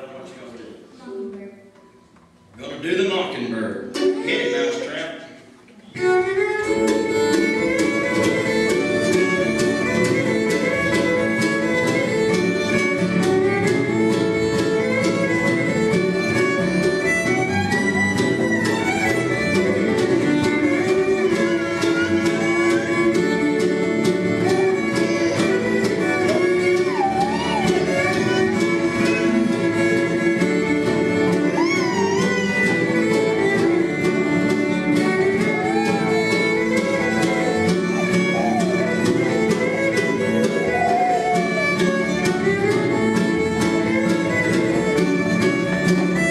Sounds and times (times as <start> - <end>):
Bluegrass: 0.0 - 46.3
Blues: 3.8 - 46.3.